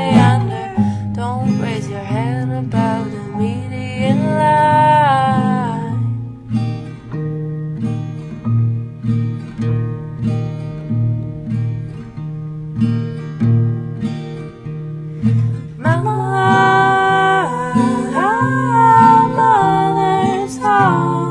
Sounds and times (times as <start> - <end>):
Music: 0.0 - 21.3.